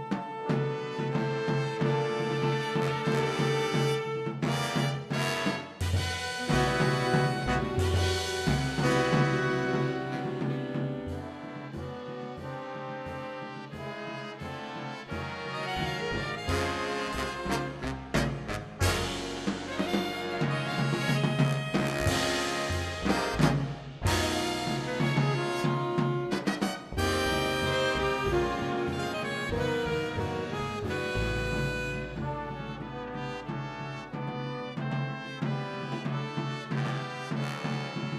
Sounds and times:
Orchestra: 0:00.0 - 0:38.1.

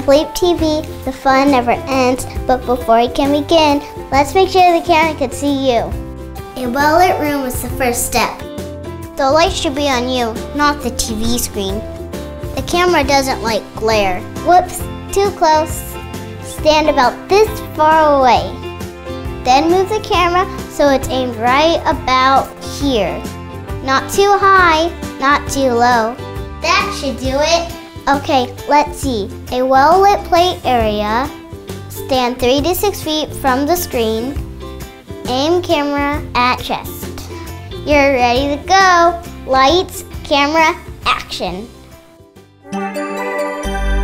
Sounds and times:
Speech: 0:00.0 - 0:05.9, 0:06.6 - 0:08.4, 0:09.2 - 0:11.8, 0:12.6 - 0:15.9, 0:16.5 - 0:18.6, 0:19.5 - 0:23.2, 0:23.8 - 0:31.3, 0:32.0 - 0:34.4, 0:35.3 - 0:37.2, 0:37.8 - 0:41.8
Music: 0:00.0 - 0:44.0.

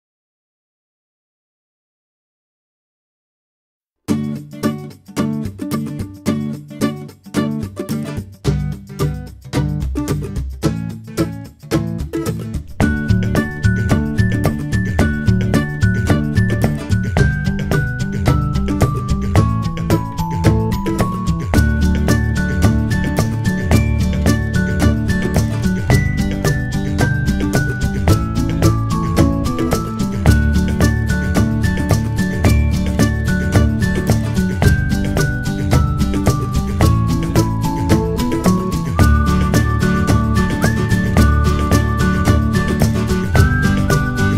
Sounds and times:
Music: 0:04.1 - 0:44.3.

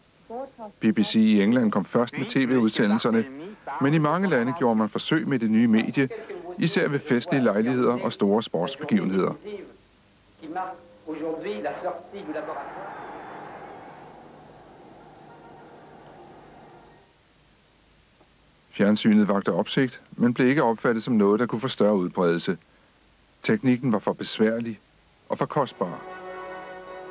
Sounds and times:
Speech: 0:00.3 - 0:09.8, 0:10.4 - 0:14.3, 0:18.7 - 0:22.6, 0:23.4 - 0:26.0
Music: 0:25.7 - 0:27.1.

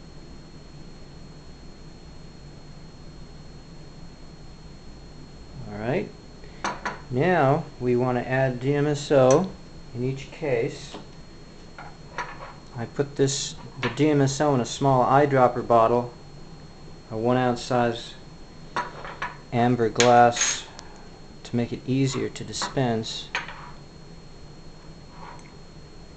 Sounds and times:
Speech: 0:05.6 - 0:06.2, 0:07.1 - 0:11.0, 0:12.8 - 0:16.2, 0:17.1 - 0:18.2, 0:19.6 - 0:20.7, 0:21.4 - 0:23.3.

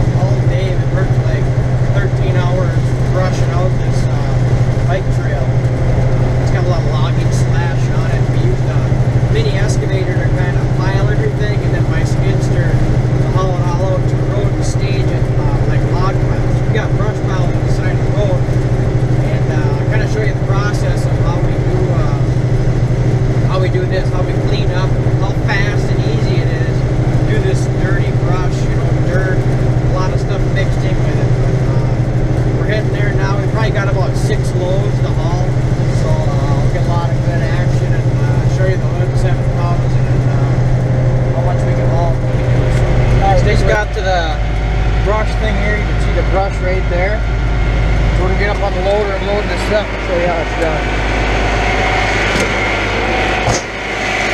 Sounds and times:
Speech: 0:00.0 - 0:05.6, 0:06.4 - 0:18.6, 0:19.2 - 0:22.4, 0:23.5 - 0:40.7, 0:41.3 - 0:47.3, 0:48.1 - 0:51.0
Truck: 0:00.0 - 0:54.3.

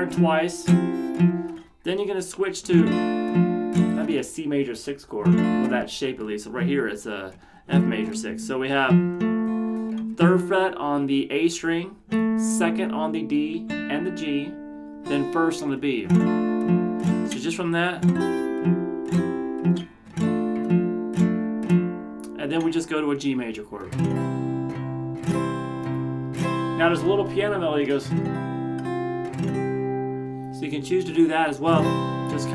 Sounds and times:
Acoustic guitar: 0:00.0 - 0:32.5.

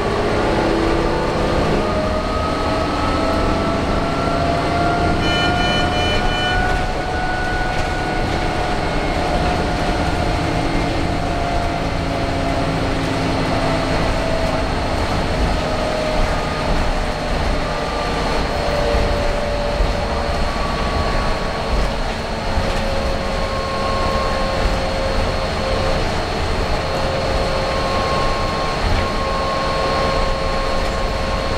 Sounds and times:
Vehicle: 0:00.0 - 0:31.5.

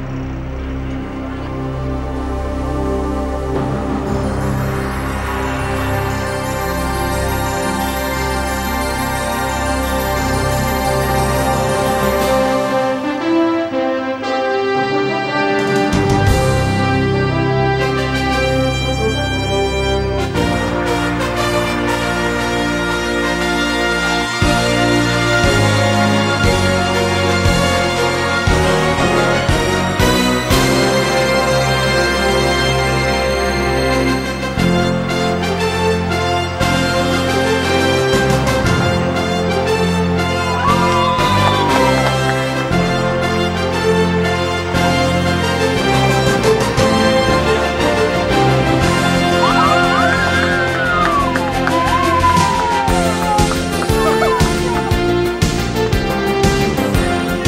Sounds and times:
Theme music: 0:00.0 - 0:57.4.

